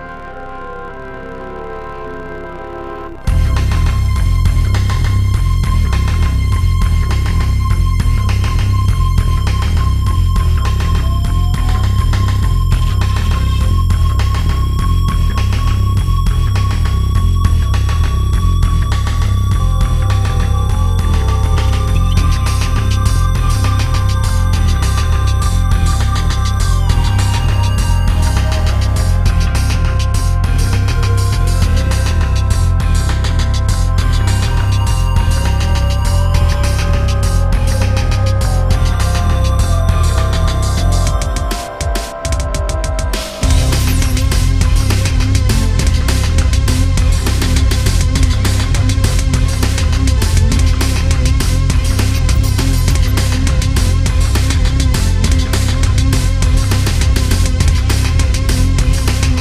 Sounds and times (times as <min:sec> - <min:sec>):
Music: 0:00.0 - 0:59.4.